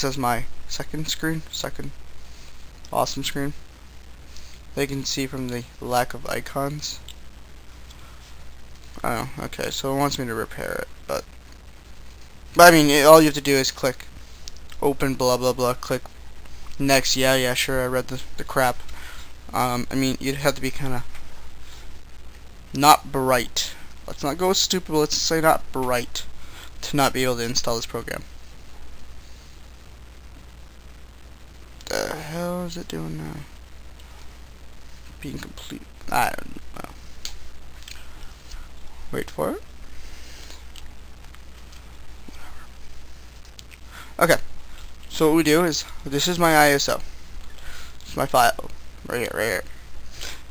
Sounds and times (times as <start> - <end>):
Speech: 0.0 - 2.0, 2.9 - 3.6, 4.8 - 7.1, 9.0 - 11.3, 12.6 - 14.1, 14.8 - 16.1, 16.8 - 18.8, 19.5 - 21.1, 22.7 - 28.3, 31.8 - 33.6, 35.2 - 37.0, 39.1 - 39.7, 44.2 - 44.5, 45.1 - 47.0, 48.0 - 49.7.